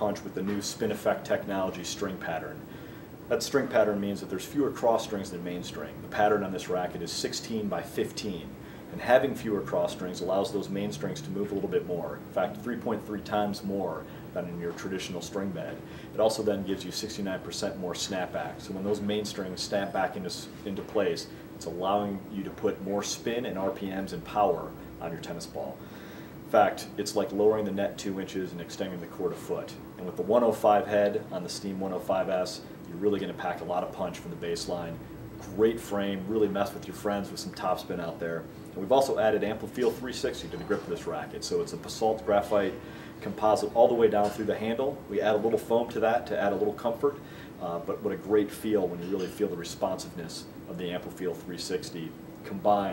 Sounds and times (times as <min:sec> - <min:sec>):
Speech: 0:00.0 - 0:02.7, 0:03.3 - 0:25.8, 0:26.5 - 0:52.9.